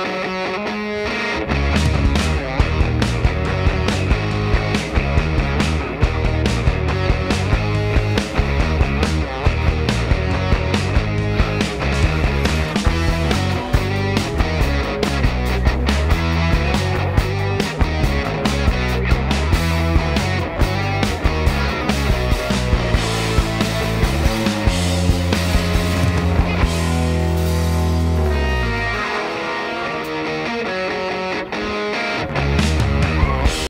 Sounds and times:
Music: 0.0s - 33.7s.

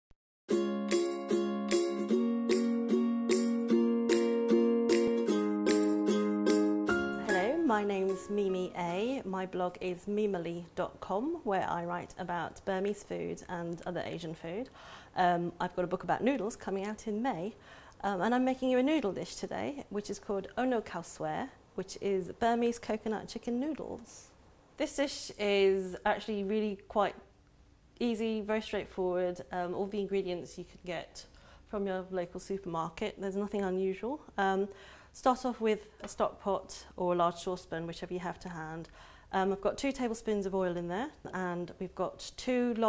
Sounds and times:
Music: 0.5s - 8.9s
Speech: 7.3s - 27.3s, 28.0s - 42.8s.

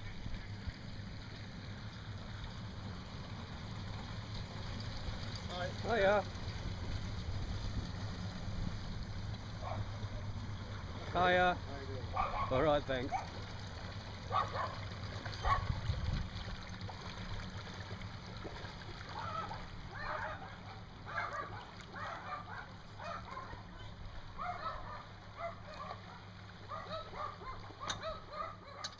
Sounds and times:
Vehicle: 0.0s - 28.9s
Splash, splatter: 13.2s - 20.6s.

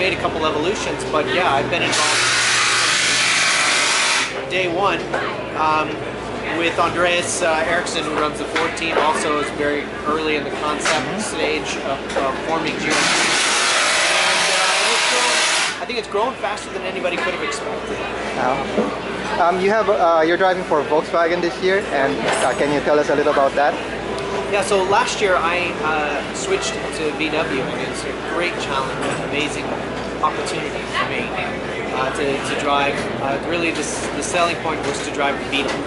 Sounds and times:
Electric toothbrush: 1.9s - 4.4s, 13.0s - 15.8s
Speech: 4.4s - 13.0s, 24.5s - 35.8s.

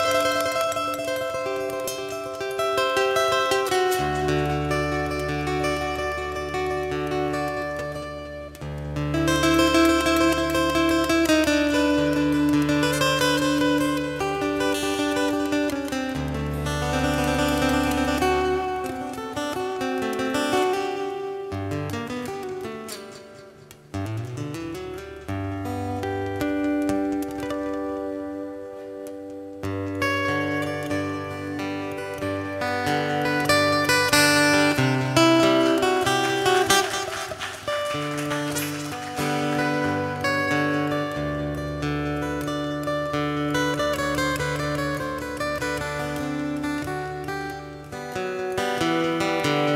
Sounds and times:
Music: 0.0s - 49.7s.

